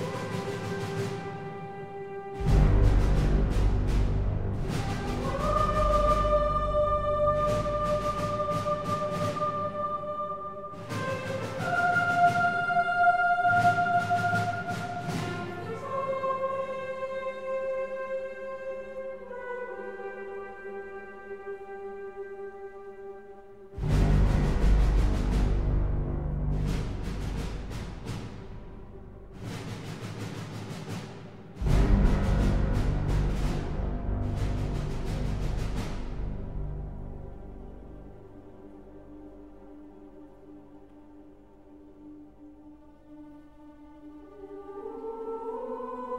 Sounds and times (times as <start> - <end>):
Music: 0.0 - 46.1.